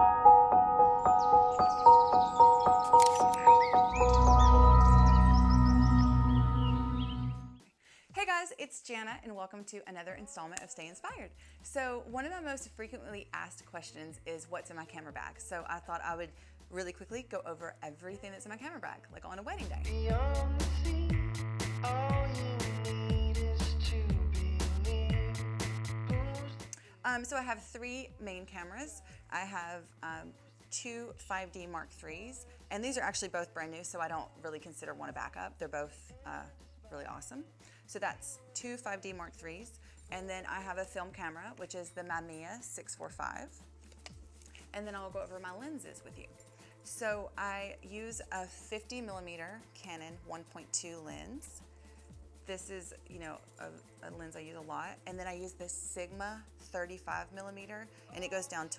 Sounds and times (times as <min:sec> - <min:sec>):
Music: 0:00.0 - 0:58.7
Speech: 0:08.1 - 0:19.9, 0:27.0 - 0:43.6, 0:44.7 - 0:46.3, 0:46.9 - 0:51.6, 0:52.5 - 0:58.7.